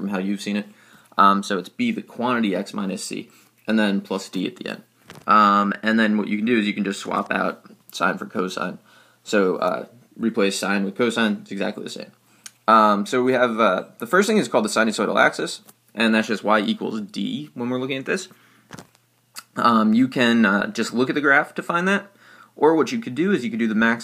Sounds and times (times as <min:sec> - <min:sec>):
Speech: 0:00.0 - 0:18.3, 0:19.4 - 0:24.0.